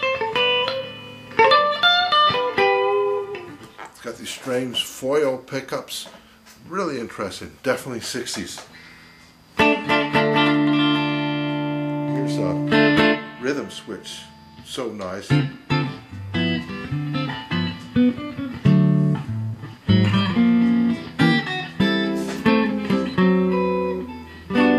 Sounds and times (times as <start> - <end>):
Electric guitar: 0.0 - 4.5, 8.6 - 24.7
Speech: 4.0 - 8.7, 12.1 - 12.7, 13.4 - 15.4.